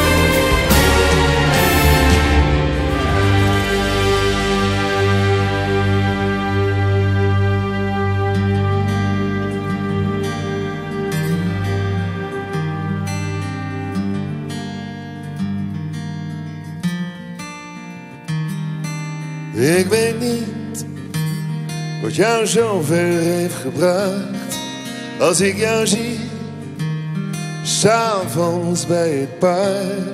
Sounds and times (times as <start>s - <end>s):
Music: 0.0s - 30.1s.